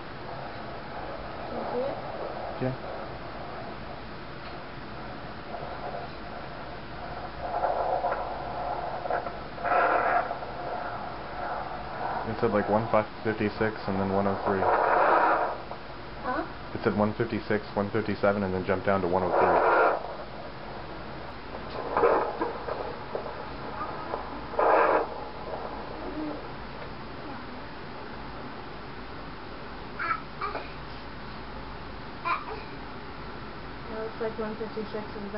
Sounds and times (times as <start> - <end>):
Speech: 12.3 - 14.7, 16.3 - 19.6.